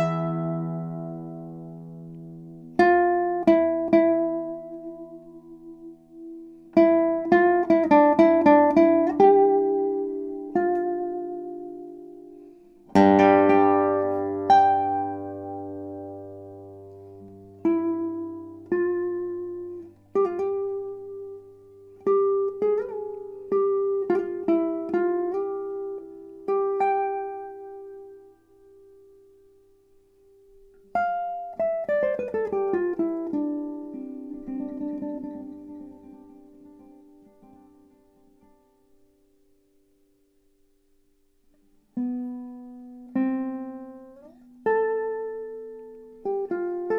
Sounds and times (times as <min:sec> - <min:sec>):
Acoustic guitar: 0:00.0 - 0:46.9
Strum: 0:00.0 - 0:46.9.